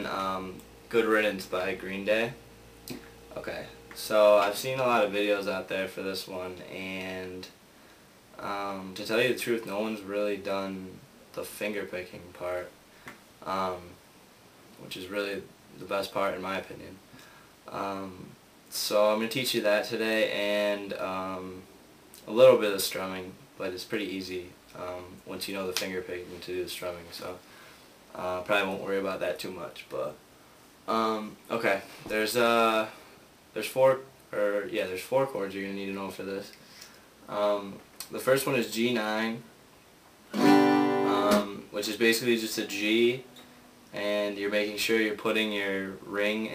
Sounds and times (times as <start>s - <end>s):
Speech: 0.0s - 2.4s, 3.3s - 7.6s, 8.4s - 12.8s, 13.4s - 14.0s, 14.8s - 17.1s, 17.7s - 27.4s, 28.1s - 30.2s, 30.9s - 36.6s, 37.3s - 39.5s, 41.1s - 43.3s, 43.9s - 46.5s.